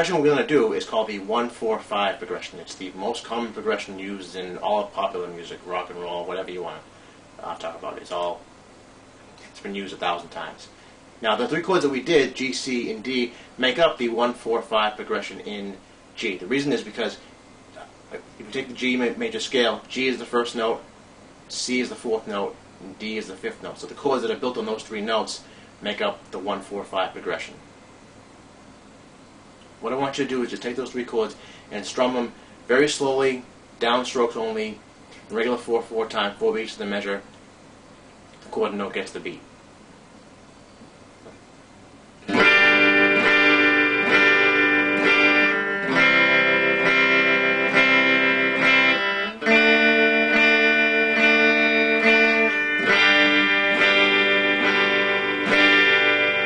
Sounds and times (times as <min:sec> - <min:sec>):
Speech: 0:00.0 - 0:08.5, 0:09.4 - 0:17.2, 0:17.8 - 0:20.9, 0:21.5 - 0:27.7, 0:29.8 - 0:37.3, 0:38.4 - 0:39.5.